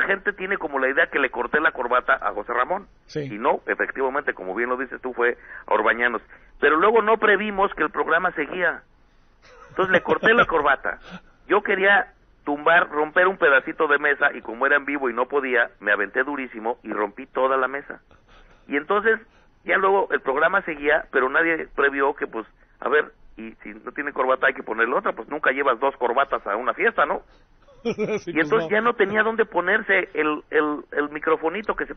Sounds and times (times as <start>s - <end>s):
Speech: 0.0s - 8.8s, 9.8s - 18.0s, 18.7s - 27.3s, 28.0s - 31.9s.